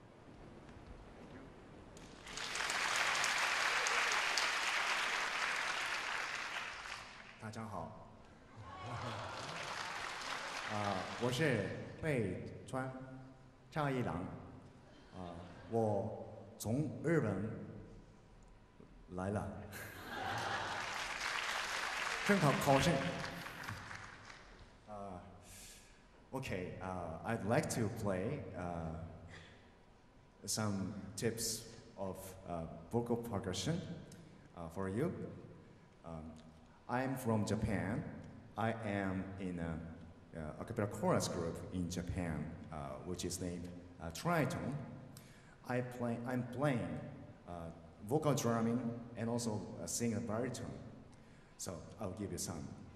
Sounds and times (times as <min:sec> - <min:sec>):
Speech: 0:07.4 - 0:09.2, 0:10.7 - 0:13.1, 0:13.7 - 0:14.4, 0:15.1 - 0:17.7, 0:19.1 - 0:19.7, 0:22.2 - 0:23.3, 0:24.9 - 0:25.4, 0:26.3 - 0:29.2, 0:30.4 - 0:33.9, 0:34.6 - 0:35.3, 0:36.0 - 0:44.9, 0:45.6 - 0:50.9, 0:51.6 - 0:52.8.